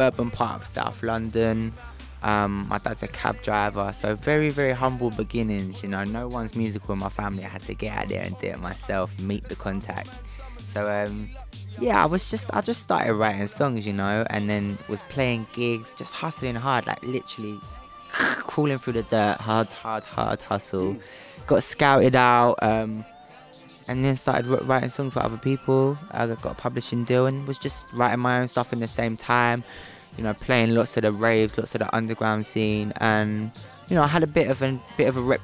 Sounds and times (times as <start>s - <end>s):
Music: 0.0s - 35.4s
Singing: 0.0s - 35.4s
Speech: 0.0s - 35.4s.